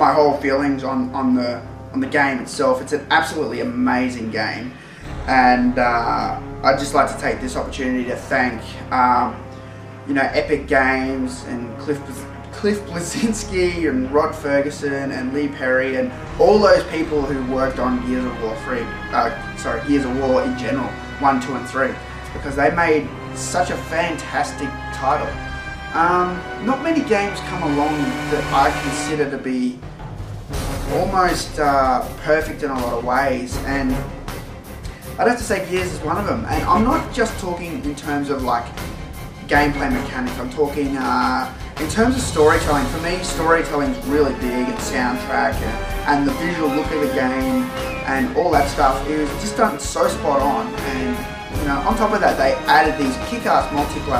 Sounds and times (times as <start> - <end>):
Speech: 0.0 - 9.4, 10.1 - 29.8, 30.8 - 34.1, 35.2 - 38.8, 39.4 - 54.1
Music: 0.0 - 54.1.